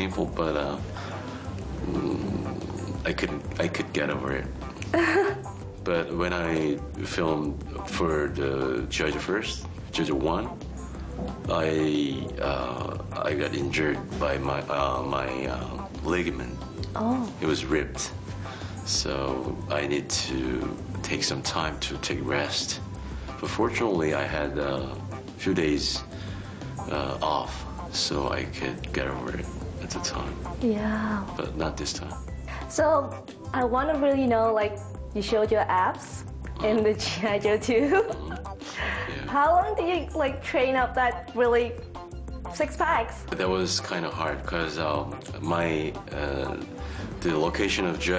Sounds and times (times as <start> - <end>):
Music: 0.0 - 48.1
Female speech, woman speaking: 17.0 - 17.3, 30.6 - 31.2, 32.8 - 37.9, 39.3 - 41.8, 42.6 - 43.2.